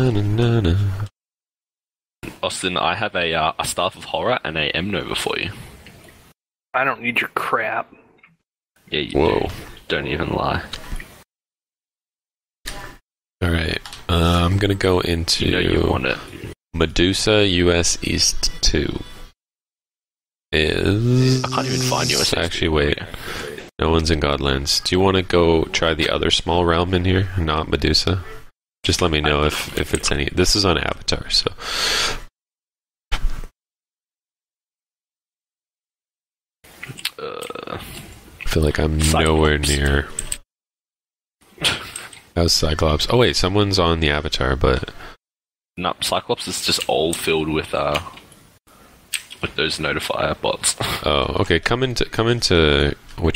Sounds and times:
Speech: 0.0s - 0.9s, 2.2s - 5.6s, 6.8s - 8.0s, 8.9s - 10.8s, 13.4s - 19.1s, 20.6s - 23.1s, 23.8s - 31.6s, 37.2s - 40.2s, 42.4s - 45.0s, 45.8s - 48.2s, 49.4s - 53.3s.

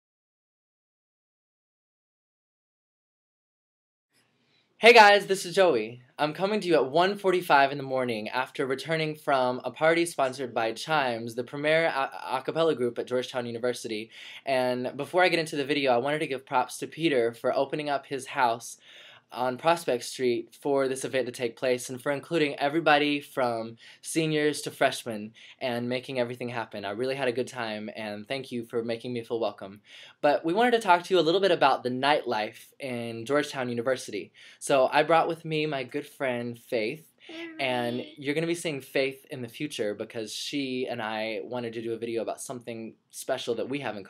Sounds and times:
Speech: 4.8s - 18.8s, 19.4s - 44.0s.

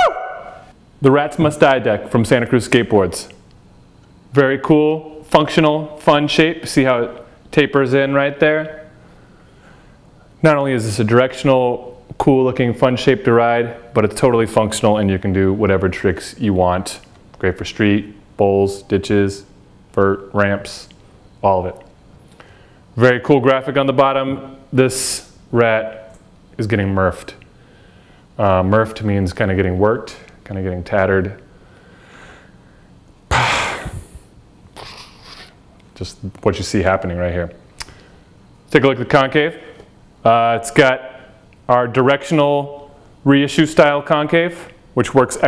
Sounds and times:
Speech: 1.0s - 3.4s, 4.3s - 9.0s, 10.4s - 21.9s, 23.0s - 27.4s, 28.4s - 31.5s, 36.0s - 37.6s, 38.7s - 45.4s.

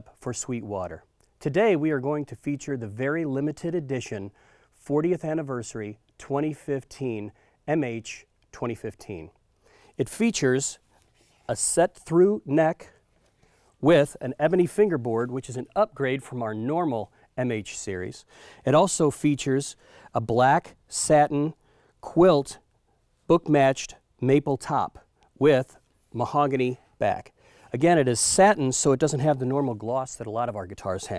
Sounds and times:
Speech: 0.0s - 9.4s, 10.0s - 10.8s, 11.5s - 13.0s, 13.8s - 22.7s, 23.3s - 31.1s.

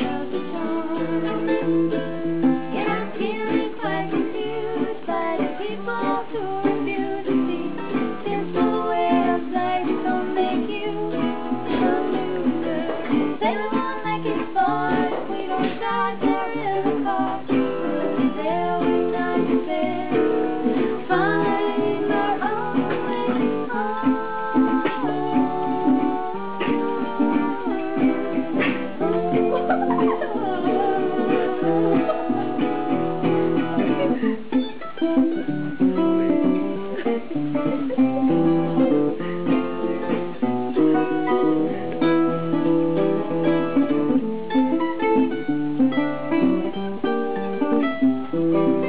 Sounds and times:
Acoustic guitar: 0.0s - 48.8s
Strum: 0.0s - 48.8s
Ukulele: 0.0s - 48.8s.

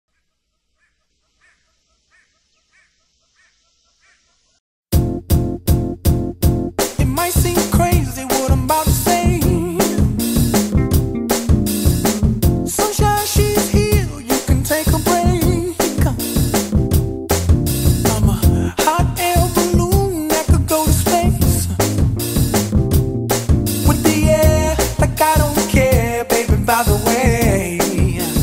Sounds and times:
Music: 4.9s - 28.4s.

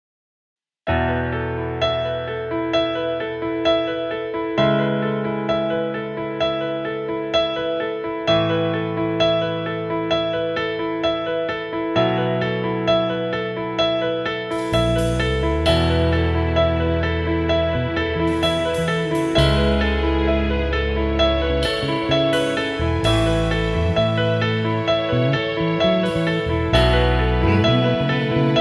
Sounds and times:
Tender music: 0.9s - 28.6s
New-age music: 1.0s - 28.6s.

